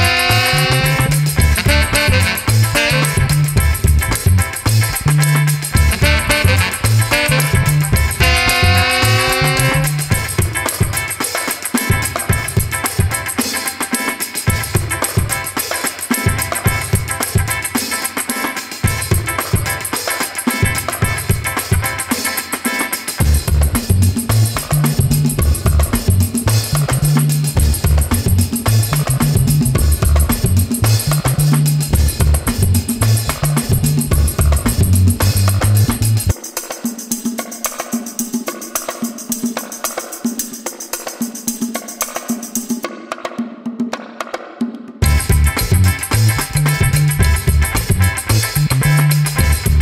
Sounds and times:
Music: 0.0s - 49.8s.

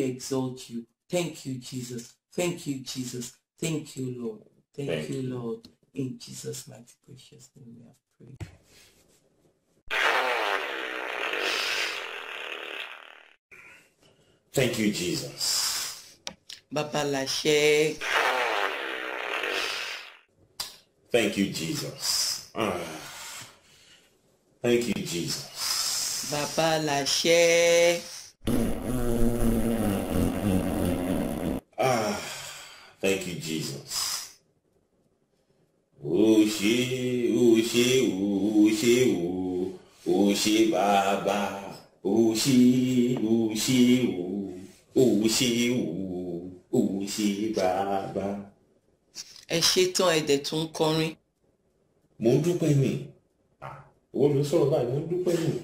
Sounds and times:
Speech: 0.0s - 8.4s, 14.6s - 15.5s, 21.2s - 23.0s, 24.6s - 25.5s, 26.3s - 28.3s, 33.0s - 34.0s, 36.0s - 48.5s, 49.5s - 51.2s, 52.2s - 55.6s.

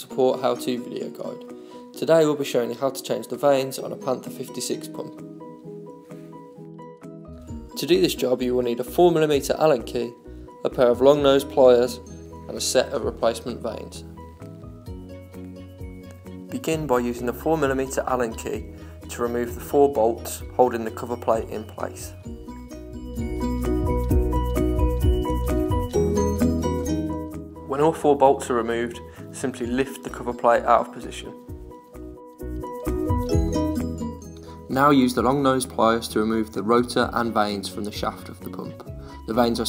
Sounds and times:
Speech: 0.0s - 1.4s, 2.0s - 5.2s, 7.8s - 14.0s, 16.5s - 22.2s, 27.7s - 31.4s, 34.7s - 39.6s
Music: 0.0s - 39.6s.

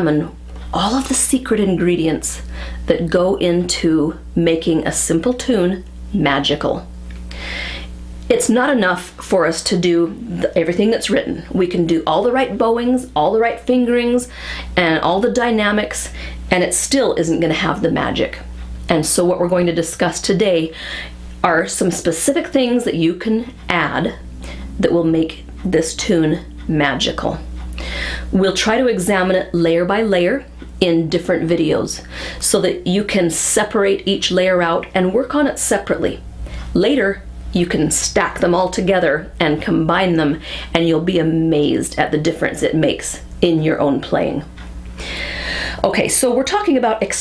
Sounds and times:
Speech: 0.0s - 6.9s, 8.3s - 20.8s, 21.4s - 27.6s, 28.3s - 44.6s, 45.8s - 47.2s.

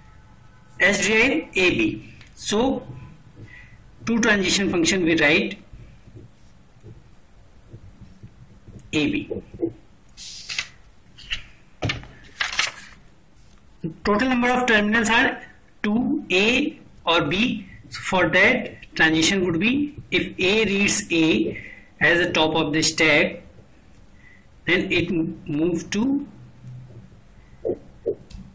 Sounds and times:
Speech: 0.8s - 2.9s, 4.0s - 5.6s, 8.9s - 9.4s, 13.8s - 23.5s, 24.7s - 26.4s.

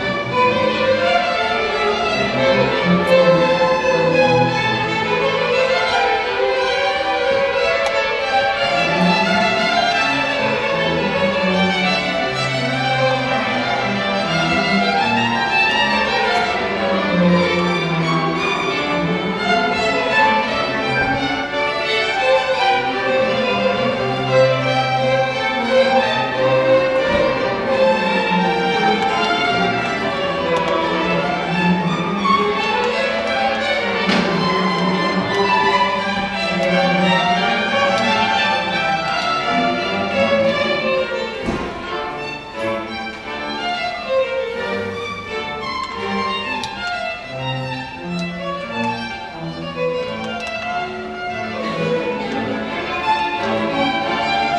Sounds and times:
Violin, fiddle: 0.0s - 54.5s.

